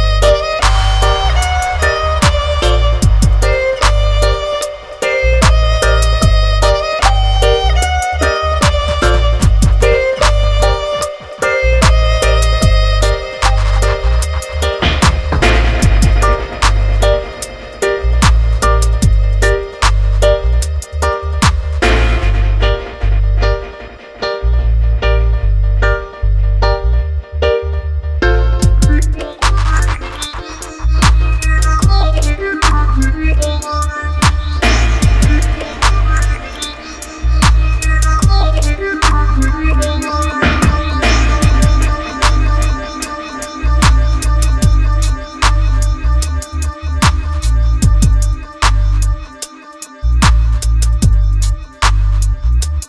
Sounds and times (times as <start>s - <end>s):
Musical instrument: 0.0s - 52.8s.